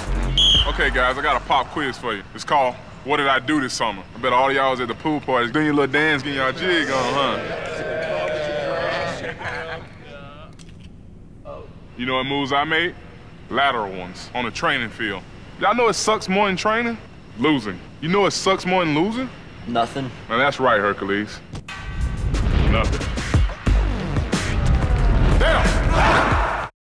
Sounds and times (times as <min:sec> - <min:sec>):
Music: 0:00.0 - 0:01.9, 0:21.6 - 0:26.7.